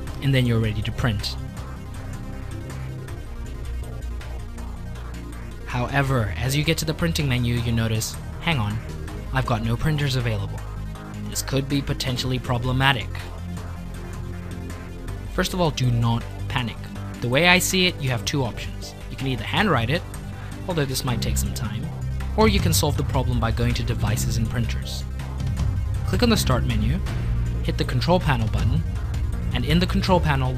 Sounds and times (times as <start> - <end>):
Music: 0.0 - 30.5
Speech: 0.2 - 1.4, 5.7 - 8.8, 9.4 - 10.6, 11.3 - 13.3, 15.4 - 20.1, 20.7 - 25.0, 26.1 - 28.9, 29.5 - 30.5.